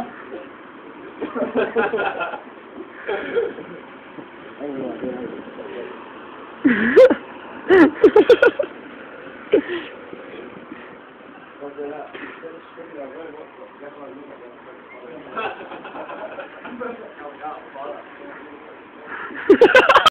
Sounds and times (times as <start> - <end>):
Speech: 16.7 - 19.3.